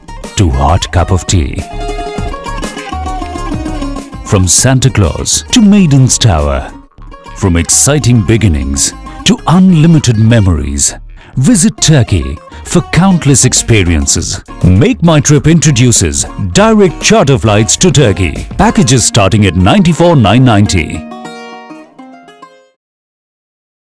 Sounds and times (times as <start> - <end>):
Music: 0.0 - 22.8
Speech: 0.3 - 1.7, 4.3 - 6.8, 7.4 - 21.0.